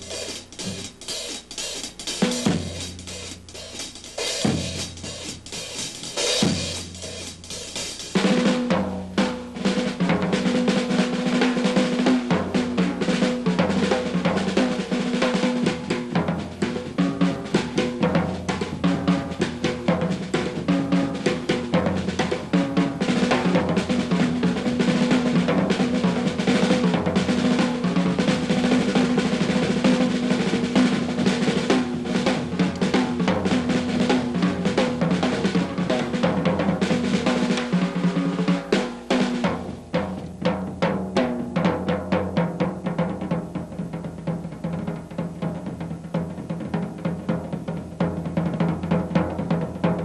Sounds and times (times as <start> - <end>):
Rimshot: 0.0 - 10.2
Bass drum: 0.0 - 10.4
Drum roll: 0.0 - 50.0.